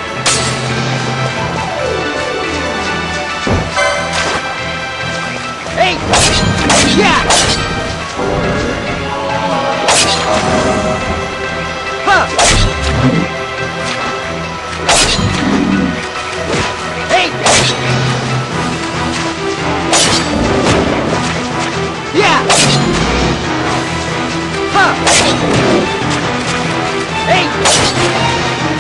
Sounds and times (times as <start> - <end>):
Music: 0.0 - 28.8.